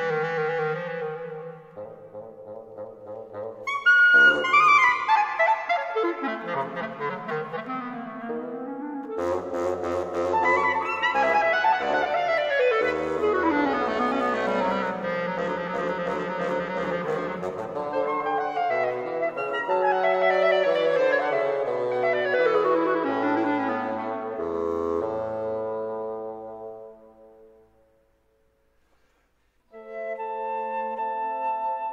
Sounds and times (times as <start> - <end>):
Clarinet: 0.0 - 28.1, 29.7 - 31.9.